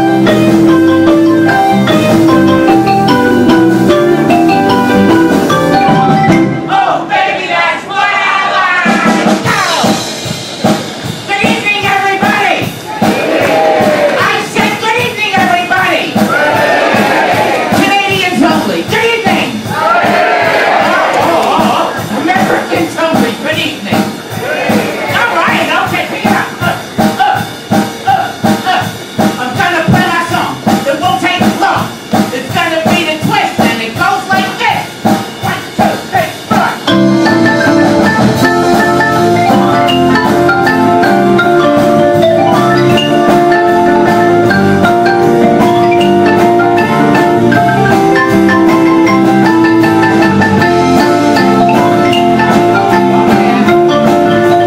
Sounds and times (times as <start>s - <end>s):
Marimba, xylophone: 0.0s - 6.7s, 36.6s - 54.6s
Drum: 0.0s - 7.2s, 8.2s - 54.6s
Drum kit: 0.0s - 54.6s.